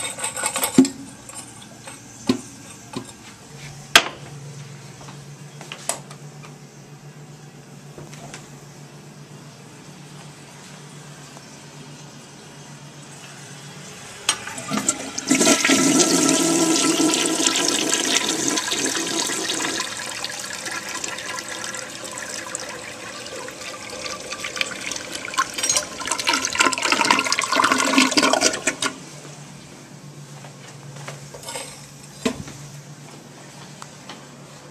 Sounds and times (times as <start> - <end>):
Toilet flush: 14.2 - 29.0.